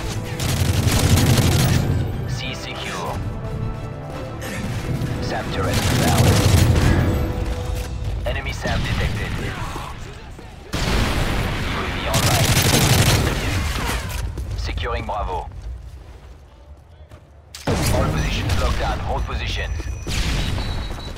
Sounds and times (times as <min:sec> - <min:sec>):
Music: 0:00.0 - 0:09.8.